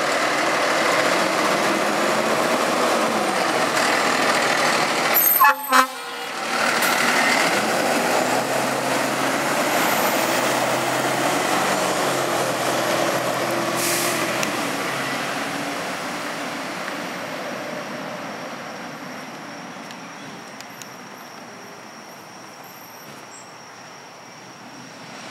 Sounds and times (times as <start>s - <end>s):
Heavy engine (low frequency): 0.0s - 25.3s
Truck: 0.0s - 25.3s
Accelerating, revving, vroom: 6.6s - 16.2s.